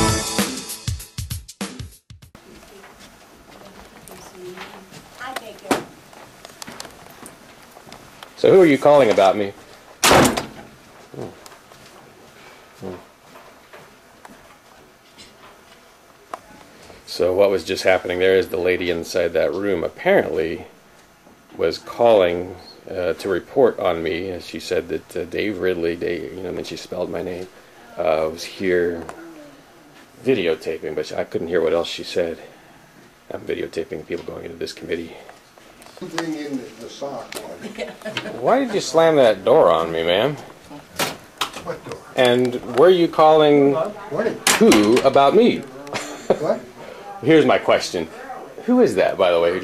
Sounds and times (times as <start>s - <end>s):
Speech: 41.6s - 49.6s.